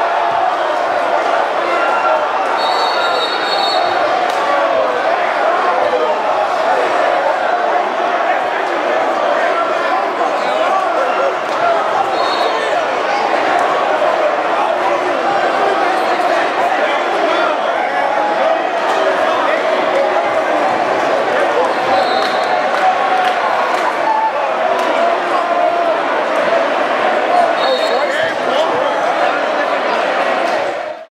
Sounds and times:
Speech: 0.0 - 31.1.

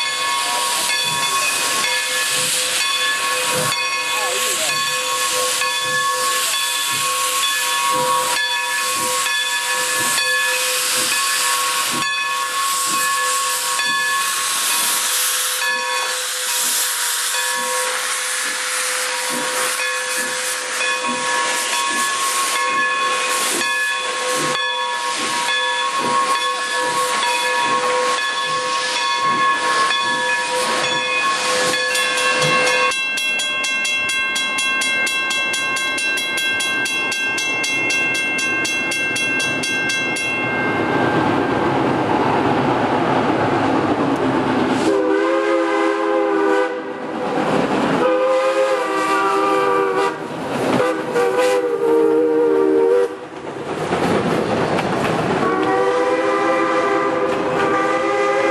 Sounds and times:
Railroad car, train wagon: 0.0 - 58.5
Train: 0.0 - 58.5
Hiss: 0.7 - 32.8.

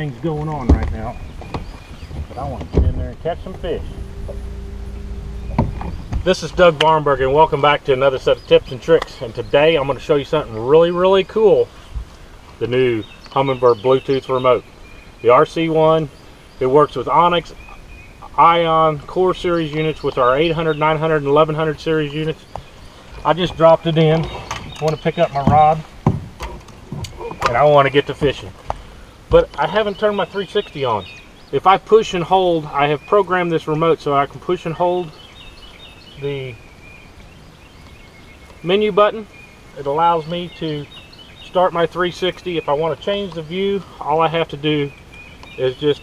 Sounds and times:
Speech: 0.0 - 1.2, 2.3 - 3.9, 6.2 - 11.7, 12.6 - 14.6, 15.2 - 17.6, 18.2 - 22.4, 23.2 - 25.9, 27.2 - 28.6, 29.3 - 35.2, 36.2 - 36.6, 38.6 - 44.9, 45.6 - 46.0.

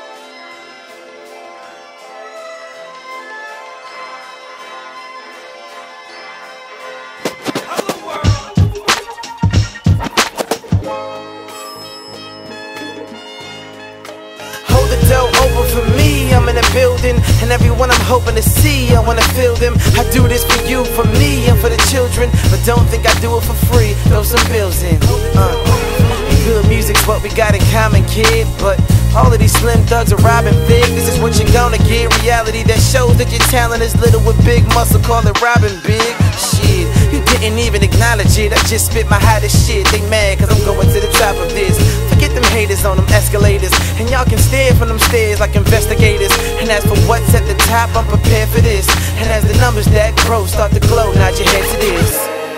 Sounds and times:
Dance music: 2.4 - 52.5.

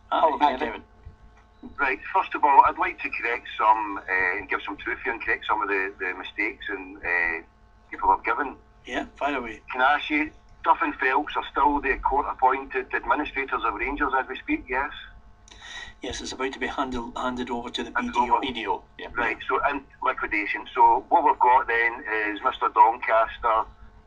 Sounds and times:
Radio: 0.1 - 0.8, 1.6 - 7.4, 8.0 - 23.6
Speech: 0.1 - 0.8, 1.6 - 7.4, 8.0 - 23.7.

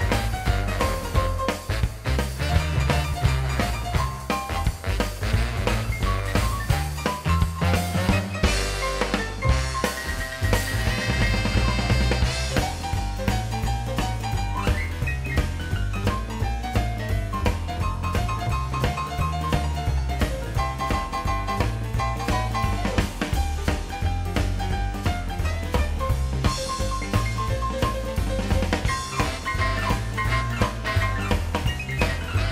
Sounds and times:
Swing music: 0.0 - 32.5.

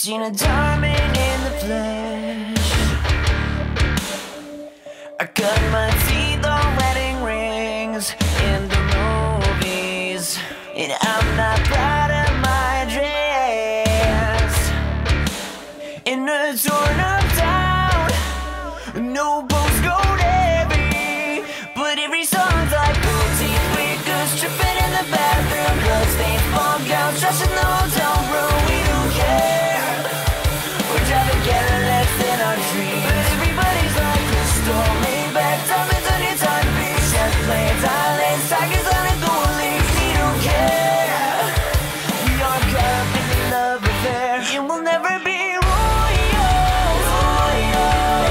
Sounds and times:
Music: 0.0 - 48.3.

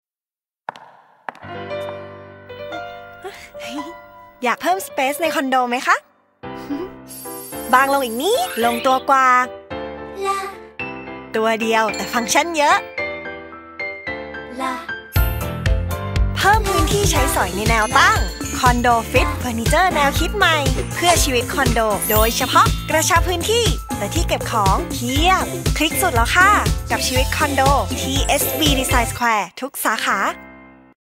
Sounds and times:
Music: 1.4 - 29.4, 30.0 - 31.0
Speech: 7.7 - 9.5, 11.4 - 12.8, 16.4 - 30.4.

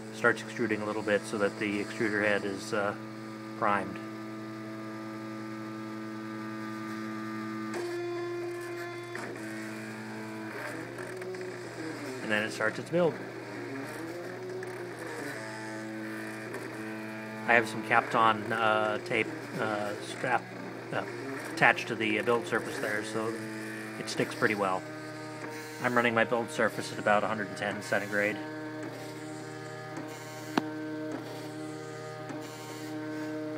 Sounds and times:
Printer: 0.0 - 33.5
Speech: 0.2 - 3.0, 3.6 - 4.0, 12.2 - 13.2, 17.5 - 23.4, 24.0 - 24.8, 25.8 - 28.4.

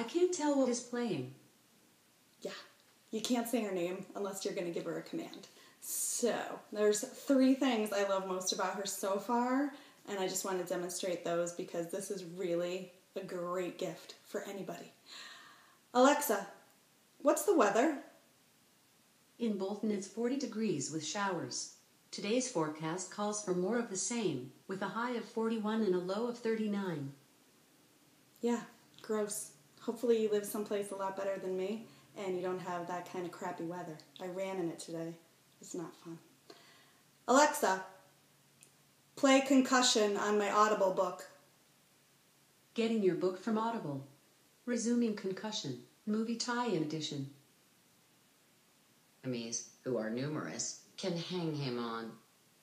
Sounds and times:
Speech: 0.0 - 1.4, 2.4 - 15.0, 16.0 - 16.6, 17.2 - 18.1, 19.4 - 27.2, 28.4 - 36.2, 37.3 - 38.0, 39.2 - 41.4, 42.8 - 47.4, 49.2 - 52.2.

